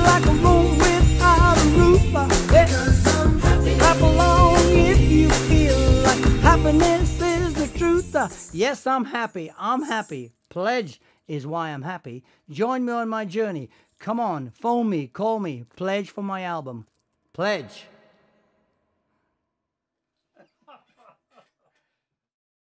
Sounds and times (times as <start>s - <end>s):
Speech: 8.6s - 17.9s.